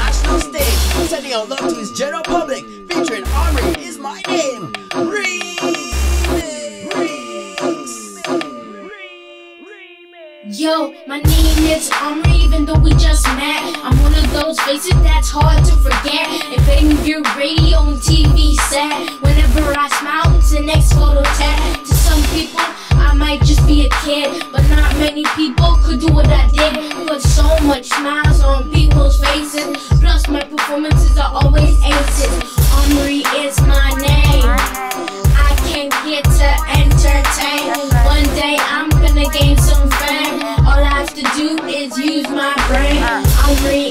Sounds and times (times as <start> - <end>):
Tender music: 0.0 - 9.8, 10.5 - 43.9.